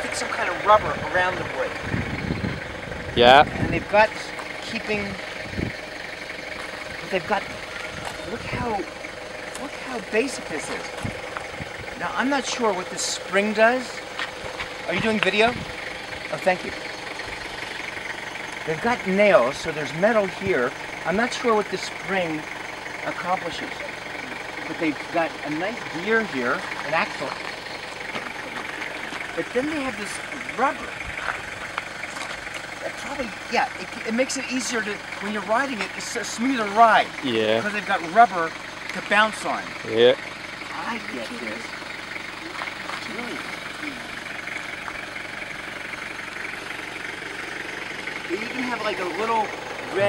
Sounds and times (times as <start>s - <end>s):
Speech: 0.0s - 1.8s, 3.2s - 5.2s, 7.0s - 7.4s, 8.2s - 8.9s, 9.6s - 10.9s, 12.0s - 14.0s, 14.9s - 15.6s, 16.3s - 16.8s, 18.7s - 22.4s, 23.1s - 23.9s, 24.6s - 27.4s, 29.4s - 31.0s, 32.8s - 41.7s, 48.3s - 50.0s.